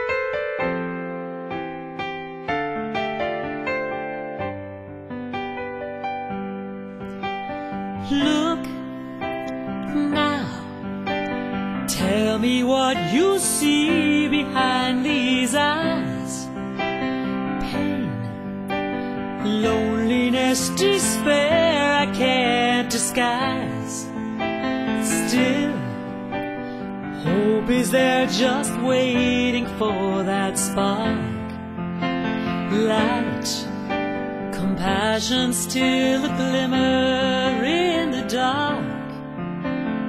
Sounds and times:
Tender music: 0:00.0 - 0:40.0.

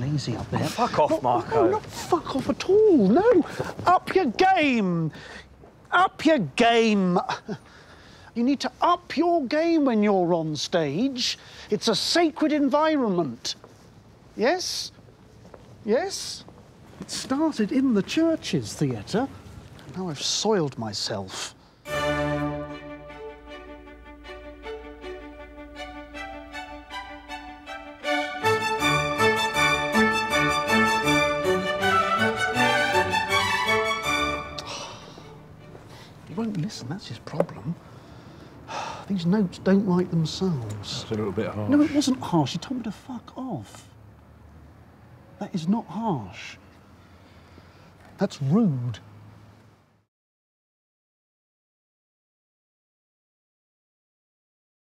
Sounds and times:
Speech: 0:00.0 - 0:05.2, 0:05.9 - 0:07.5, 0:08.4 - 0:13.6, 0:14.4 - 0:15.0, 0:17.1 - 0:19.3, 0:19.9 - 0:21.6, 0:36.3 - 0:37.8, 0:39.1 - 0:43.9, 0:45.4 - 0:46.6, 0:48.2 - 0:49.0.

